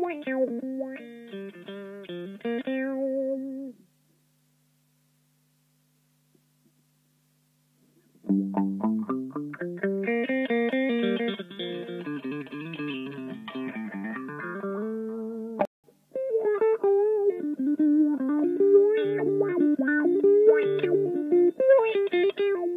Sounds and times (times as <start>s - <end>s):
Guitar: 0.0s - 3.9s, 7.9s - 22.7s
Effects unit: 0.0s - 22.7s.